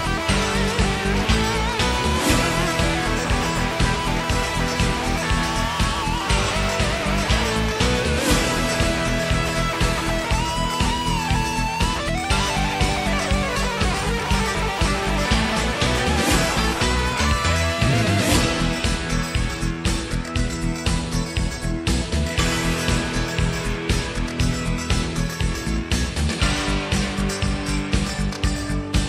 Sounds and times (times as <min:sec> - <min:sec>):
Music: 0:00.0 - 0:29.0.